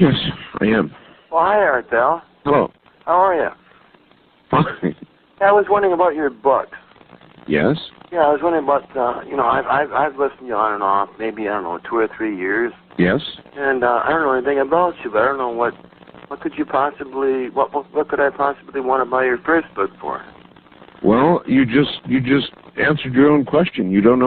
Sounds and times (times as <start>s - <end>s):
Speech: 0.0s - 3.6s, 7.5s - 20.3s, 21.0s - 24.2s.